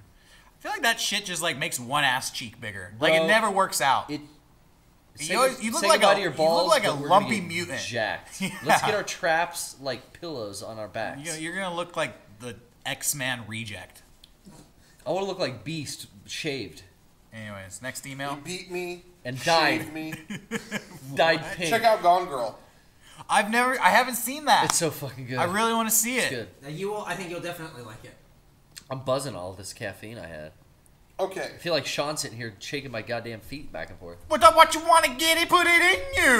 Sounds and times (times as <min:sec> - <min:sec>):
Inside, small room: 0:00.0 - 0:36.3
Speech: 0:00.6 - 0:04.3, 0:05.2 - 0:14.0, 0:31.2 - 0:36.3.